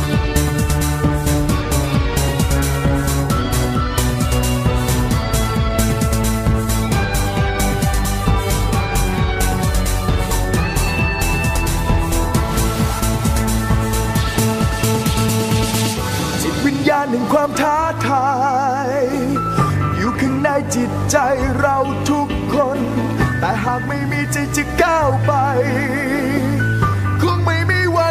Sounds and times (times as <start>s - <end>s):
Music: 0.0s - 28.1s.